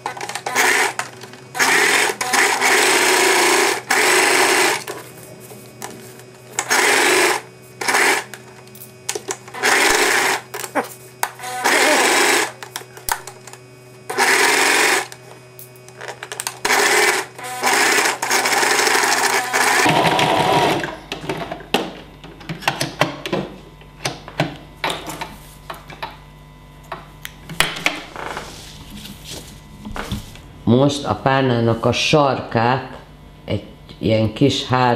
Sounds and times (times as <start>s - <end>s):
Sewing machine: 0.0s - 5.0s, 6.6s - 8.4s, 9.5s - 10.5s, 11.4s - 13.4s, 14.1s - 15.2s, 15.9s - 21.0s.